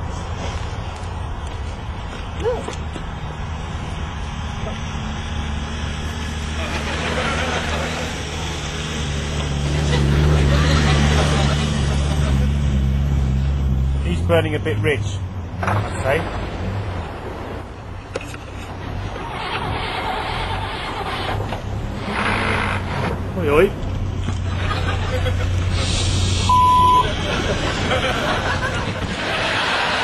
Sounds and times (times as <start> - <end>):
Car: 0.0 - 30.0
Speech: 14.0 - 15.2, 15.9 - 16.3, 23.4 - 23.8
Engine starting: 19.0 - 23.2.